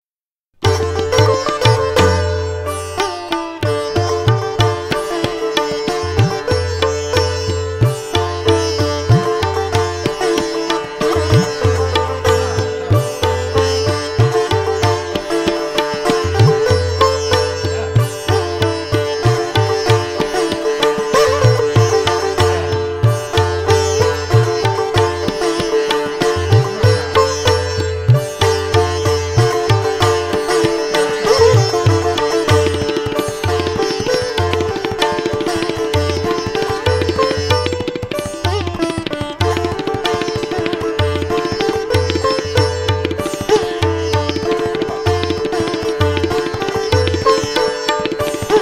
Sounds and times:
Tabla: 0.6 - 48.6.

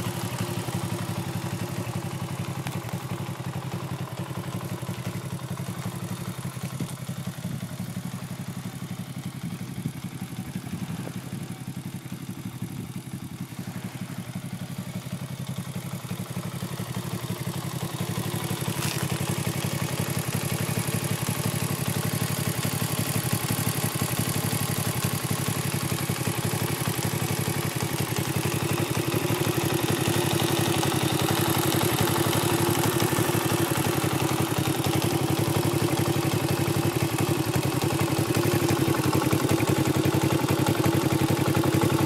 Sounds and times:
Motorcycle: 0.0 - 42.0.

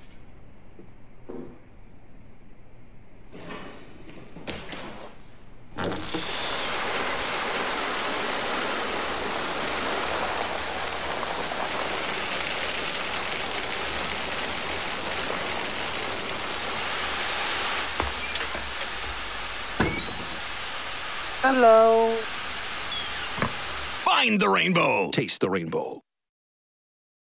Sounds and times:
Door: 19.8 - 20.4
Speech: 21.4 - 22.2, 24.0 - 26.0.

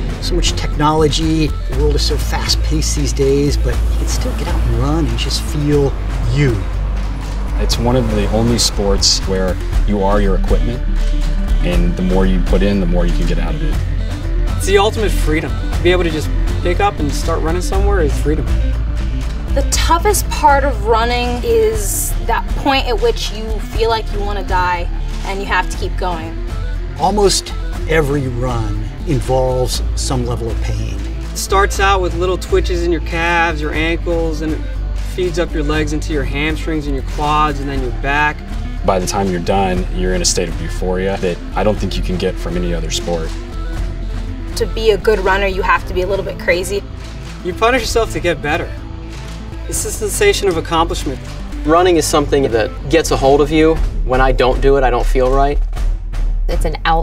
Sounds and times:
Music: 0.0 - 57.0
Speech: 0.3 - 6.6, 7.6 - 10.8, 11.6 - 13.8, 35.2 - 43.3, 49.7 - 55.6, 56.5 - 57.0.

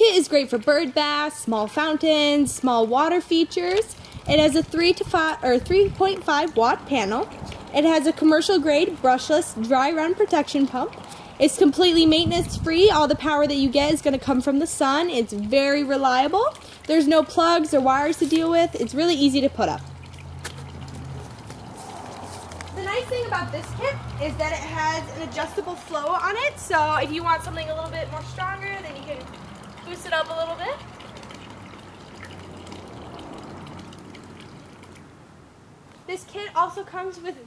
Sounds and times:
Water: 0.0 - 37.4
Water tap, faucet: 27.4 - 34.8.

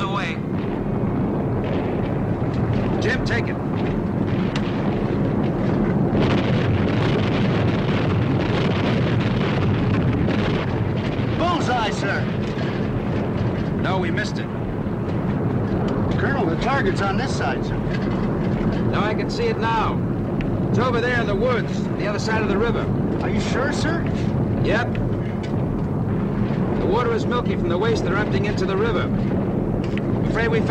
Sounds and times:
Speech: 0.0 - 0.4, 3.0 - 3.6, 11.4 - 12.3, 13.8 - 14.5, 16.2 - 17.8, 18.9 - 20.0, 20.8 - 24.9, 26.8 - 29.2, 30.3 - 30.7.

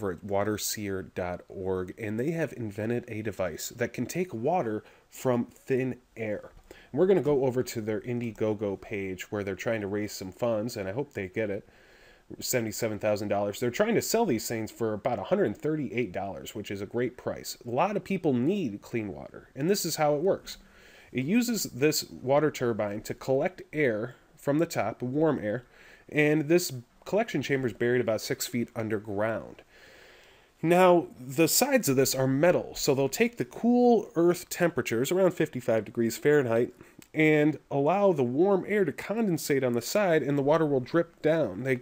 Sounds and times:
Speech: 0.0 - 11.7, 12.3 - 29.6, 30.6 - 41.8.

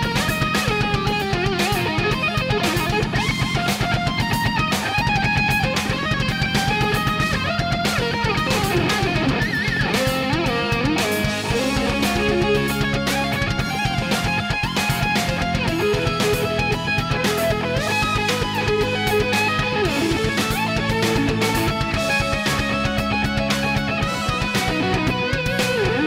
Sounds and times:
Electric guitar: 0.0 - 26.0.

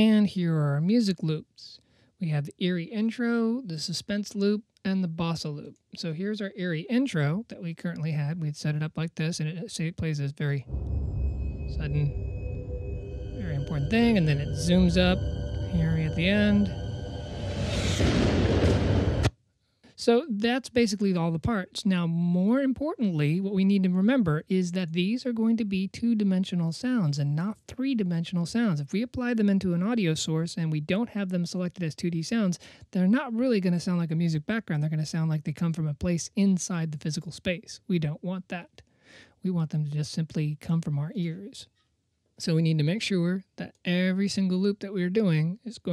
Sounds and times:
Speech: 0.0 - 10.7, 11.8 - 12.2, 13.4 - 16.7, 19.9 - 38.8, 39.4 - 41.7, 42.4 - 45.9.

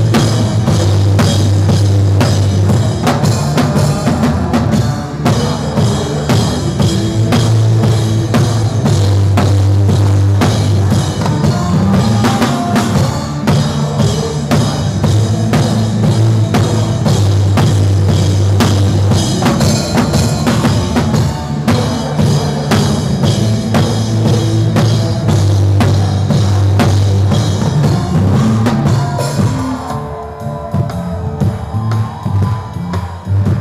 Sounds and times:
Drum: 0.0 - 33.6
Drum kit: 0.0 - 33.6
Singing: 2.2 - 33.6.

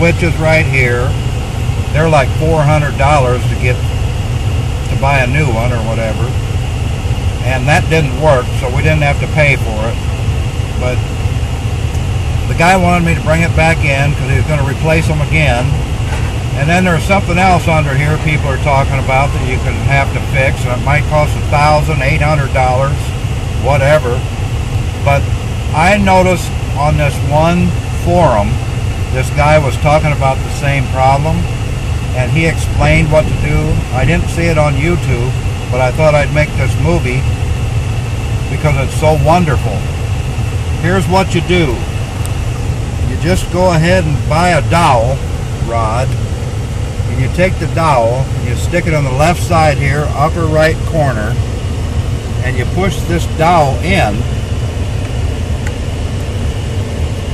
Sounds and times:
Speech: 0.0 - 1.2, 1.9 - 3.8, 4.9 - 6.4, 7.4 - 10.0, 10.8 - 11.0, 12.5 - 15.8, 16.6 - 24.2, 25.1 - 28.6, 29.2 - 31.5, 32.2 - 37.3, 38.5 - 39.9, 40.8 - 41.9, 43.0 - 46.2, 47.1 - 51.4, 52.4 - 54.3
Vehicle: 0.0 - 57.3.

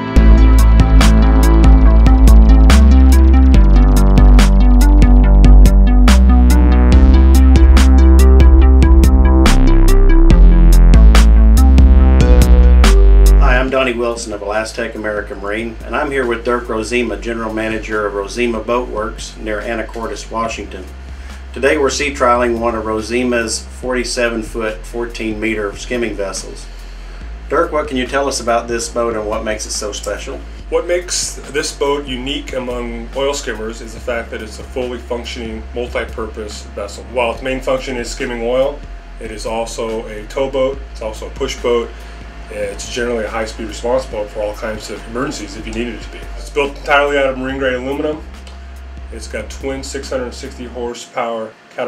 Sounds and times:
Music: 0.0 - 51.8
Speech: 13.4 - 20.9, 21.6 - 26.7, 27.5 - 41.9, 42.5 - 48.3, 49.1 - 51.8.

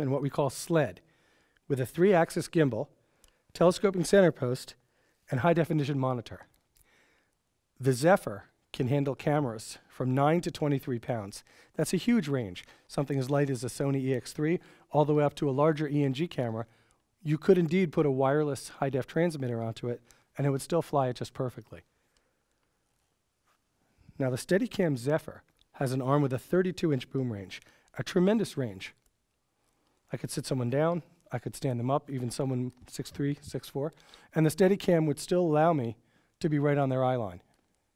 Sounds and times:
Speech: 0.0 - 1.0, 1.7 - 2.9, 3.5 - 6.5, 7.8 - 21.9, 24.2 - 29.0, 30.1 - 37.5.

